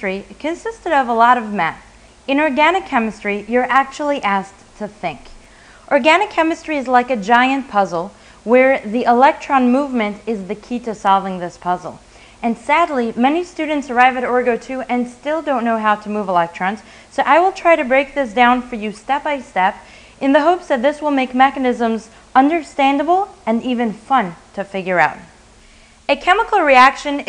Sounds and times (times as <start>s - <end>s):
Speech: 0.0s - 25.3s, 26.1s - 27.2s.